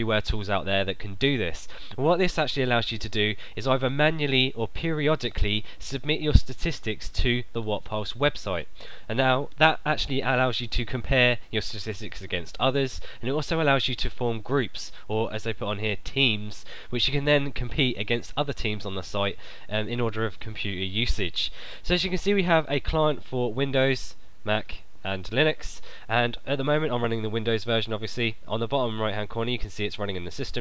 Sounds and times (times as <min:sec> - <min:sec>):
Speech: 0:00.0 - 0:30.6.